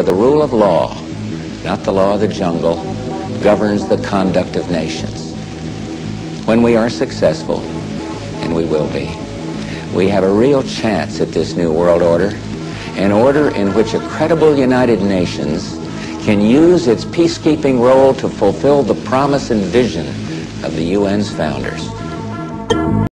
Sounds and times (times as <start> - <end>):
Male speech, man speaking: 0.0 - 1.1, 1.7 - 5.4, 6.4 - 7.7, 8.4 - 21.9
Music: 0.0 - 23.1.